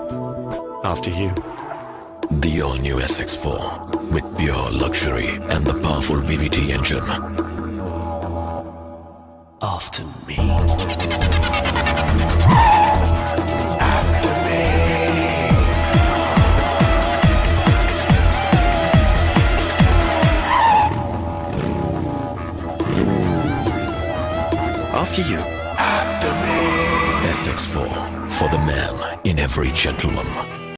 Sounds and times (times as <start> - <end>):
Music: 0.0 - 30.7
Speech: 0.8 - 1.4, 2.3 - 7.2, 9.6 - 11.1, 24.9 - 25.4, 27.2 - 30.5
Car: 19.9 - 24.5.